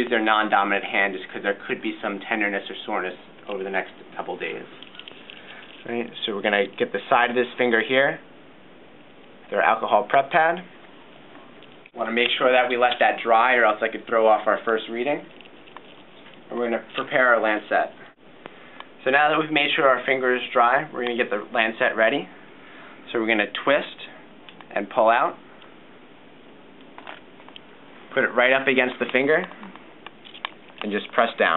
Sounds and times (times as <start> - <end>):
Speech: 0.0 - 4.8, 5.8 - 8.2, 9.5 - 10.7, 12.0 - 15.3, 16.5 - 18.2, 19.0 - 22.4, 23.0 - 25.4, 28.1 - 29.8, 30.8 - 31.5
Inside, small room: 0.0 - 31.5.